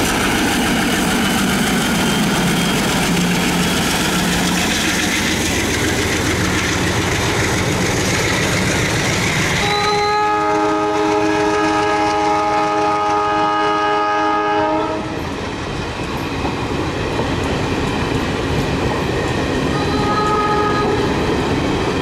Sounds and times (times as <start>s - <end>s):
Clickety-clack: 0.0s - 13.2s, 15.2s - 22.0s
Railroad car, train wagon: 0.0s - 22.0s
Train horn: 9.6s - 15.2s, 19.7s - 21.1s.